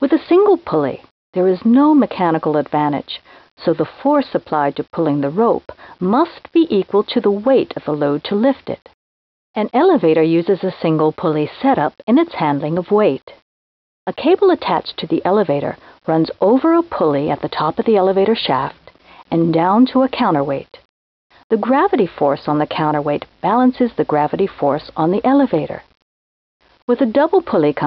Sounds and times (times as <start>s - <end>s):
Speech: 0.0s - 8.9s, 9.6s - 13.4s, 14.1s - 20.8s, 21.5s - 25.9s, 26.9s - 27.8s.